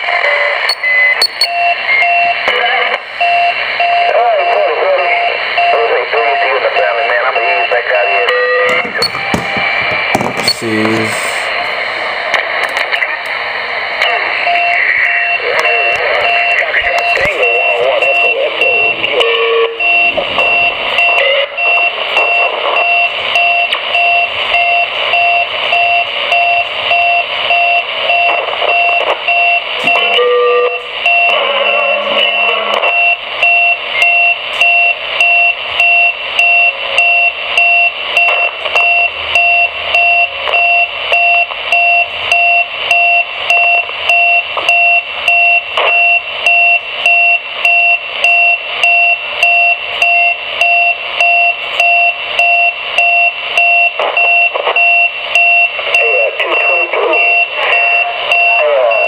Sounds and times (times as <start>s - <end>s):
Fire alarm: 0.0s - 11.4s, 14.1s - 59.0s
Smoke detector, smoke alarm: 0.3s - 2.4s, 3.2s - 10.7s, 14.4s - 59.0s
Beep, bleep: 0.7s - 2.4s, 3.2s - 4.6s, 5.2s - 9.8s, 16.2s - 19.1s, 19.8s - 59.0s.